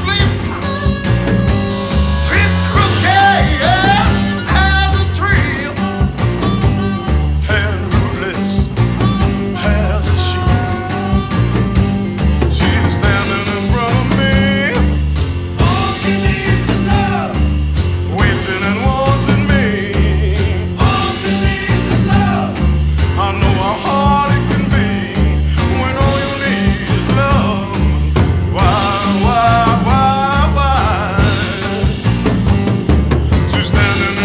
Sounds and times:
Pop music: 0.0 - 34.2
Psychedelic rock: 0.0 - 34.2.

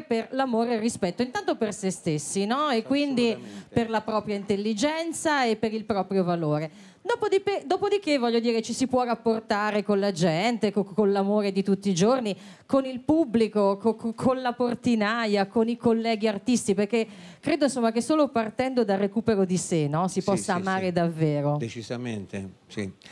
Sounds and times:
Speech: 20.2 - 21.0, 21.7 - 23.0.

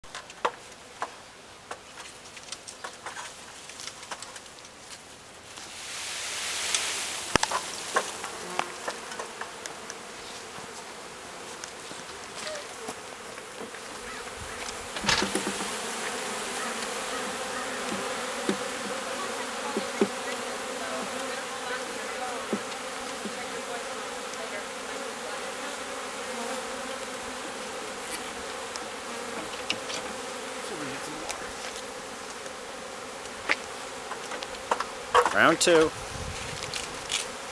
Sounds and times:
Bee, wasp, etc.: 0.1 - 37.5
Fly, housefly: 0.1 - 37.5.

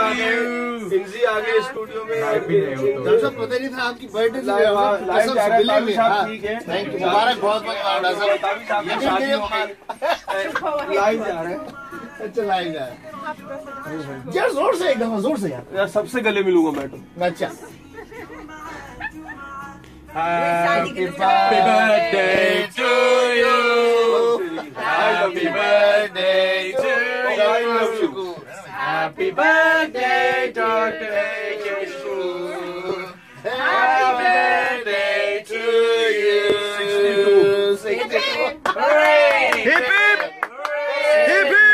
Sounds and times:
Music: 11.0 - 21.6.

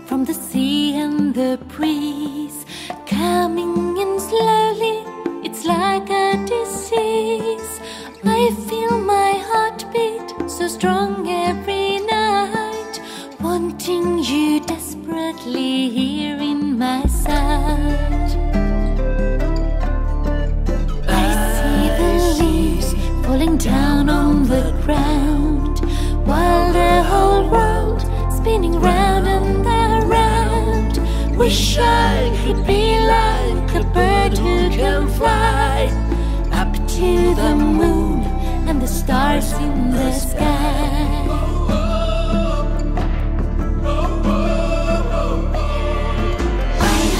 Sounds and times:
Music: 0.0 - 47.1.

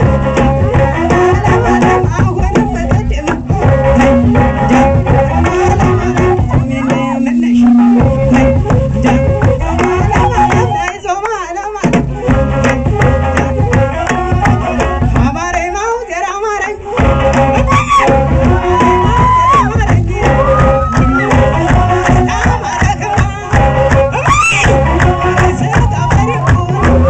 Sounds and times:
Crowd: 0.0 - 27.0
Music: 0.0 - 27.0.

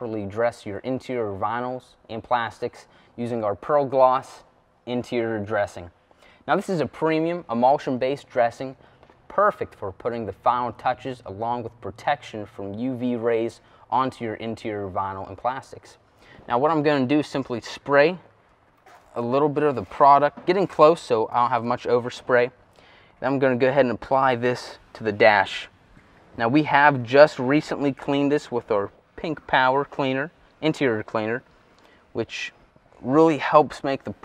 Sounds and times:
Speech: 0.0 - 18.3, 19.1 - 22.6, 23.2 - 25.7, 26.4 - 31.4, 32.2 - 34.2.

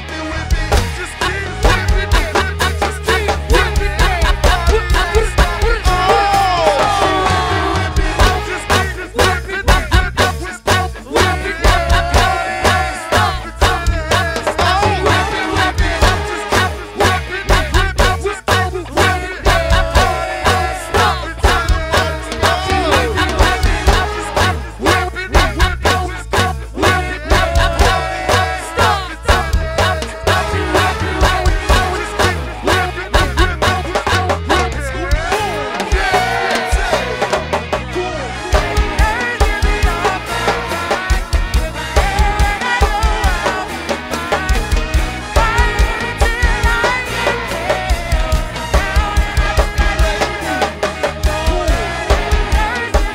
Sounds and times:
Music: 0.0 - 53.1.

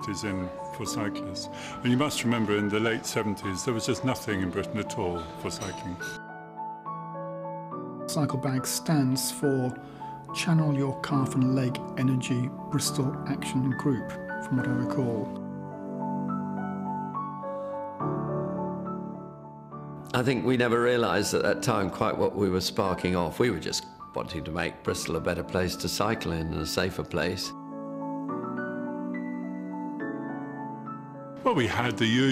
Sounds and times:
Speech: 0.0 - 6.2, 20.1 - 27.6, 31.5 - 32.3
Music: 0.0 - 32.3.

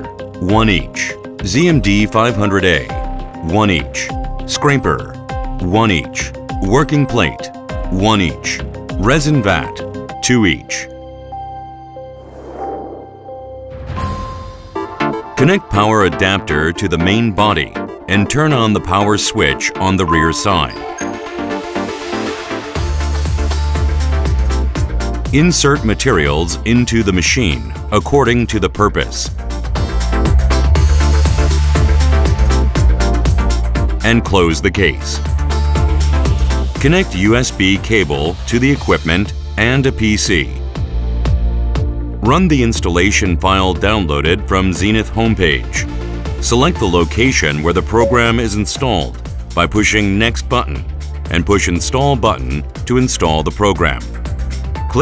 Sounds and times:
Music: 0.0 - 55.0
Speech: 0.4 - 10.9, 15.4 - 20.9, 25.3 - 29.4, 34.0 - 35.2, 36.8 - 40.6, 42.2 - 54.1.

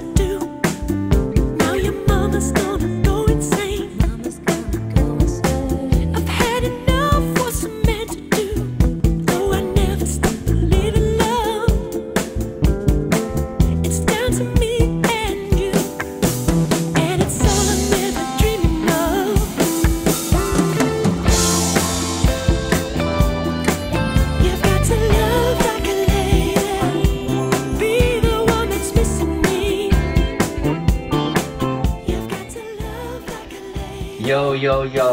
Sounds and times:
Soundtrack music: 16.0 - 35.1.

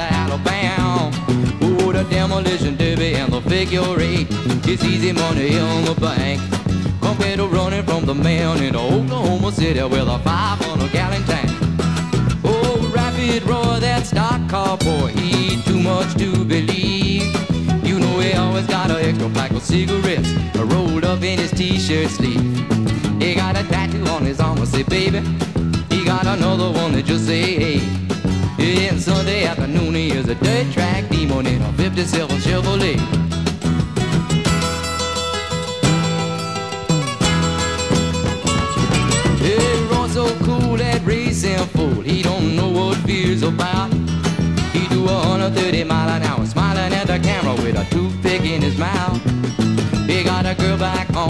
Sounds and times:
Music: 0.0 - 51.3.

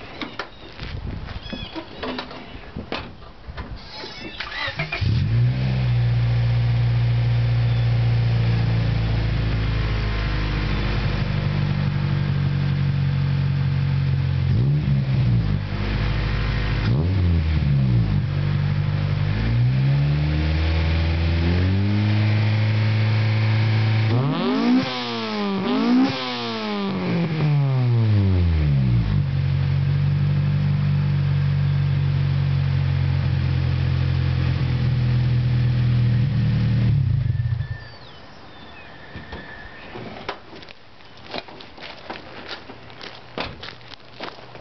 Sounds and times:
Outside, rural or natural: 0.0 - 44.6
Car: 3.3 - 44.6.

